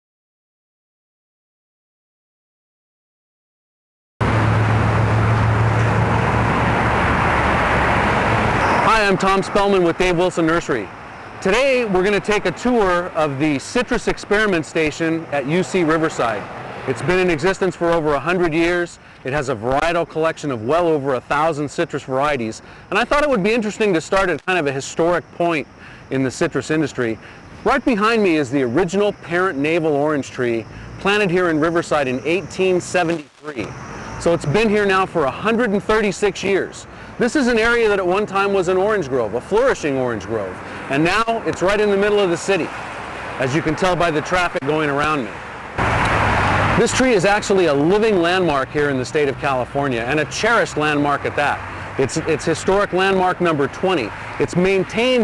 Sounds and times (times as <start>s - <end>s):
Field recording: 4.2s - 55.2s
Outside, urban or manmade: 4.2s - 55.2s
Speech: 8.8s - 42.7s, 43.4s - 45.3s, 46.8s - 55.2s.